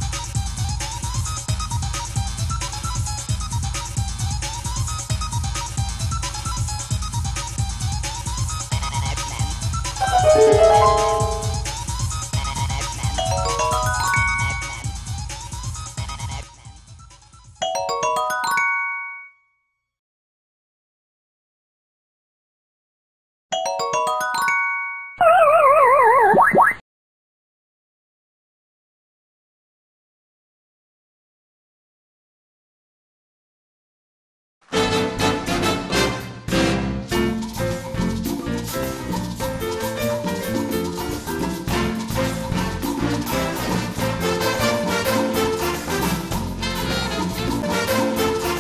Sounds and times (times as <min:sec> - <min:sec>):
Jingle, tinkle: 0:10.0 - 0:11.8, 0:13.2 - 0:15.2, 0:17.6 - 0:19.6, 0:23.6 - 0:25.2
Glockenspiel: 0:10.0 - 0:12.0, 0:13.1 - 0:15.2, 0:17.6 - 0:19.9, 0:23.6 - 0:25.4
Marimba, xylophone: 0:10.0 - 0:12.0, 0:13.0 - 0:15.2, 0:17.6 - 0:19.4, 0:23.6 - 0:25.4.